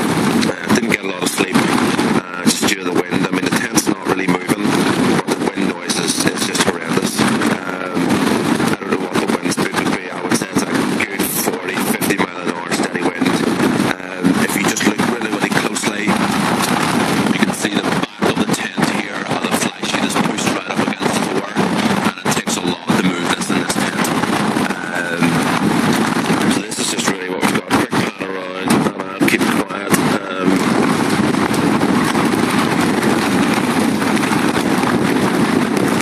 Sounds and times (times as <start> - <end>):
Speech: 0.0 - 25.5, 26.4 - 30.8.